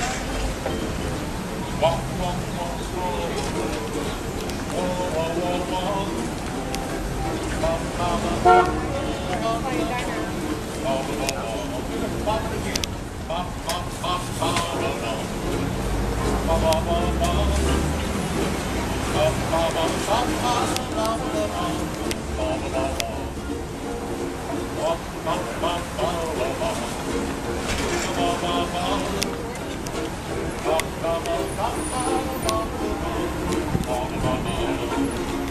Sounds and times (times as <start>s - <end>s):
Crowd: 0.0s - 35.5s
Outside, urban or manmade: 0.0s - 35.5s
Ukulele: 0.0s - 35.5s
Speech: 8.1s - 12.9s.